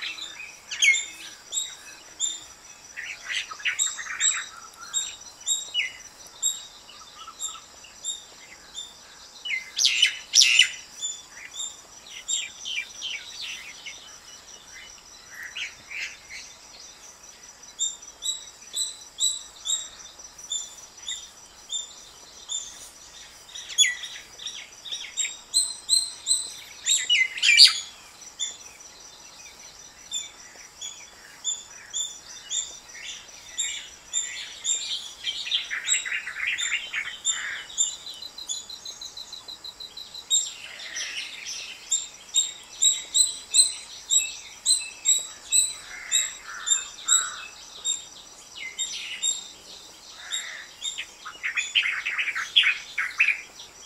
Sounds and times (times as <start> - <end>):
Chirp, tweet: 0.0 - 53.8.